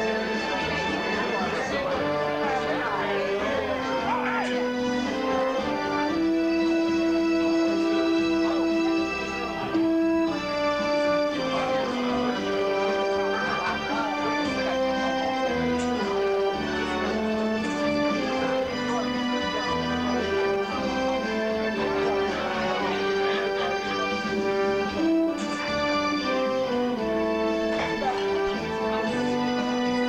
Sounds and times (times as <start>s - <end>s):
French horn: 0.0s - 30.0s.